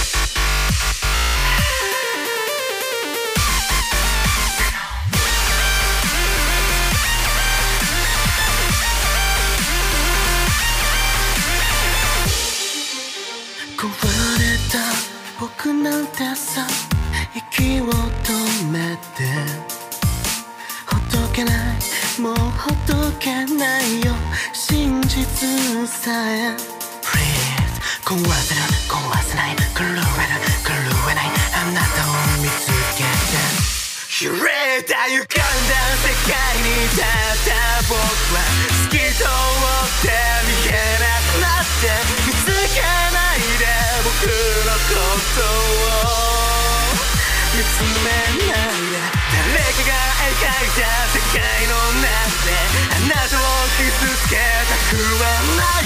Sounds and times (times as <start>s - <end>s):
Dubstep: 0.0s - 55.8s.